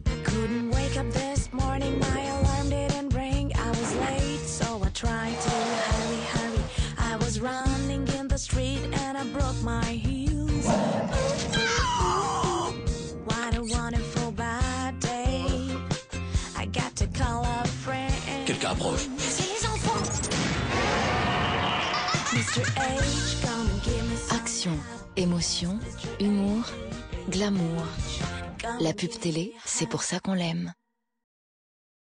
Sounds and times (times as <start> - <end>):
Music: 0.0 - 30.8
Speech: 24.3 - 26.7, 28.7 - 30.8.